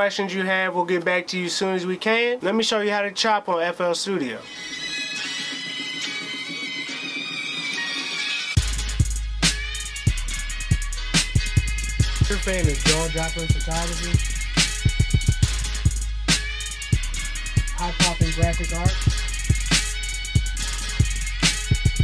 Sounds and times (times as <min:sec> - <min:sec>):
Speech: 0:00.0 - 0:04.5, 0:12.2 - 0:14.2, 0:17.8 - 0:19.0
Music: 0:04.4 - 0:22.0.